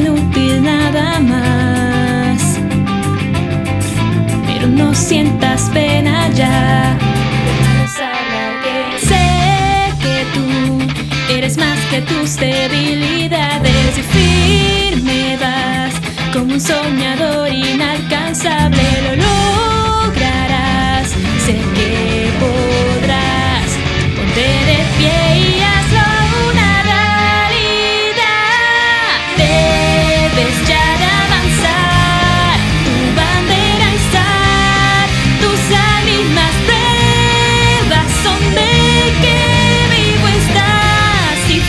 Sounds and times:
Acoustic guitar: 0.0s - 41.6s.

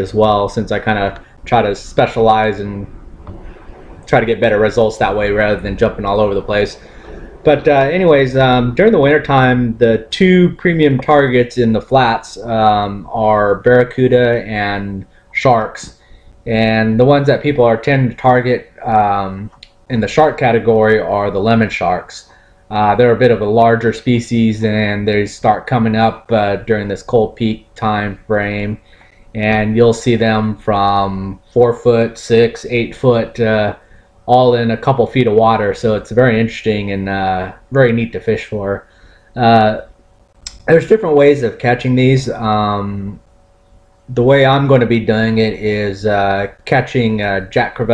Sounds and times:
Speech: 0.0s - 3.0s, 4.0s - 39.9s, 40.5s - 43.3s, 44.1s - 47.9s.

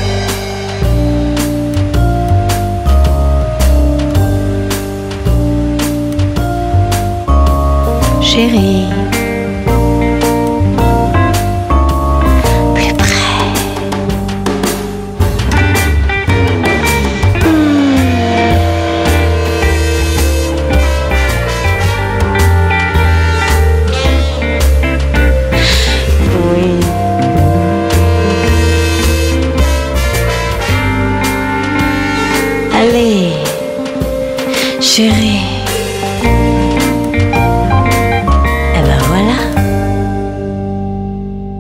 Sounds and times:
Music: 0.0s - 41.6s
Speech: 8.2s - 9.1s, 12.6s - 13.9s, 25.6s - 27.1s, 32.8s - 33.6s, 34.7s - 35.7s, 38.7s - 39.6s.

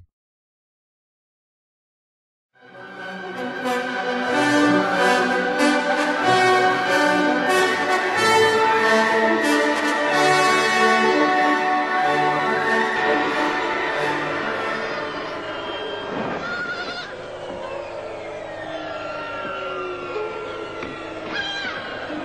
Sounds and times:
Music: 2.6s - 16.4s.

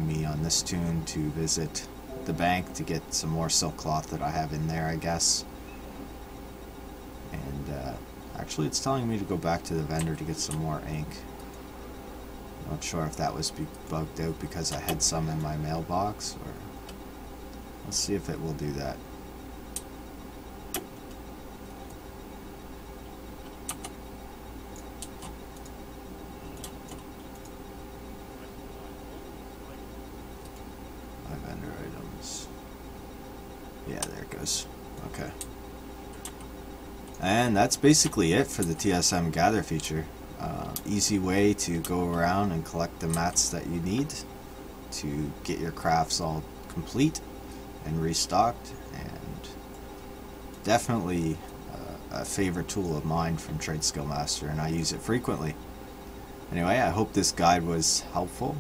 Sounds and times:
Typing: 23.4s - 24.0s, 24.7s - 25.7s, 36.1s - 36.5s.

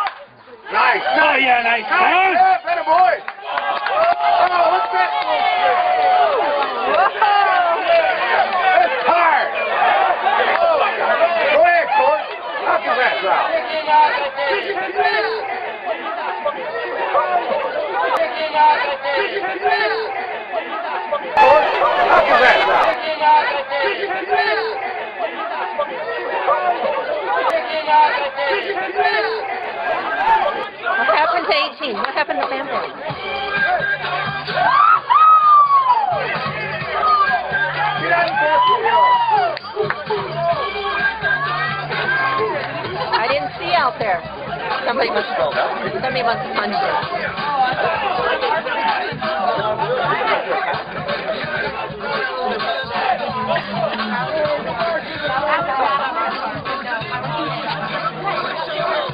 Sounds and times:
Speech: 25.7s - 33.0s, 43.1s - 59.1s.

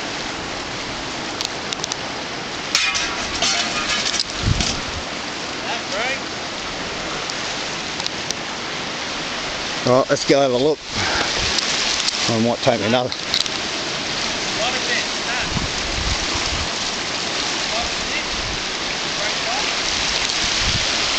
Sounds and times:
Speech: 5.6s - 6.2s, 9.8s - 10.8s, 12.3s - 13.2s, 14.6s - 15.5s, 17.7s - 18.3s, 19.2s - 19.8s.

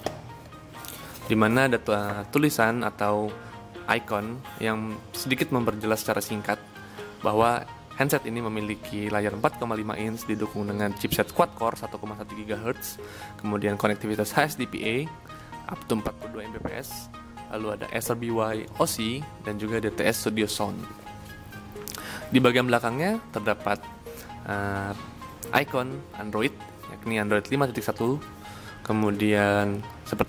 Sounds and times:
Music: 0.0s - 30.2s
Speech: 7.3s - 12.9s, 15.7s - 20.8s, 24.5s - 28.2s, 28.9s - 30.2s.

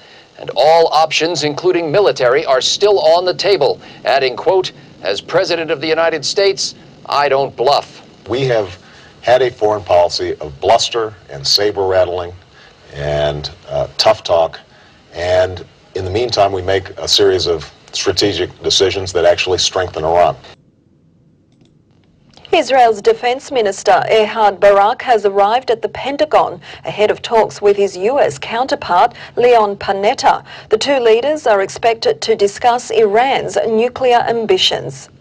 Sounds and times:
Speech: 0.4s - 20.6s, 22.4s - 35.1s.

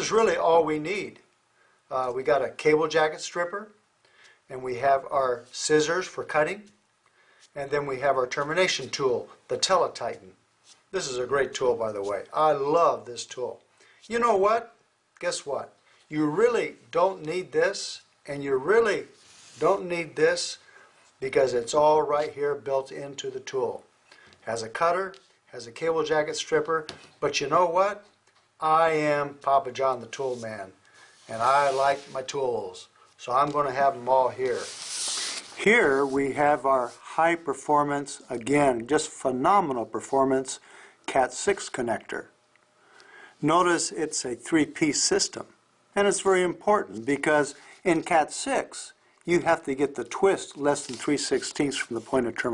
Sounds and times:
Speech: 0.0s - 1.3s, 1.9s - 3.8s, 4.5s - 6.8s, 7.6s - 20.6s, 21.2s - 34.7s, 35.6s - 42.4s, 43.4s - 52.5s.

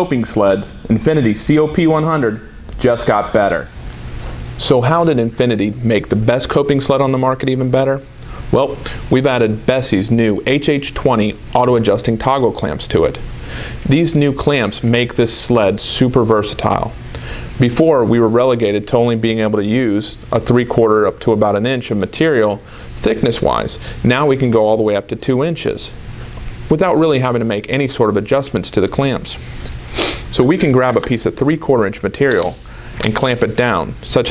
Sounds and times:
Speech: 0.0s - 3.7s, 4.6s - 13.2s, 13.8s - 17.0s, 17.6s - 26.0s, 26.7s - 29.4s, 30.3s - 34.3s.

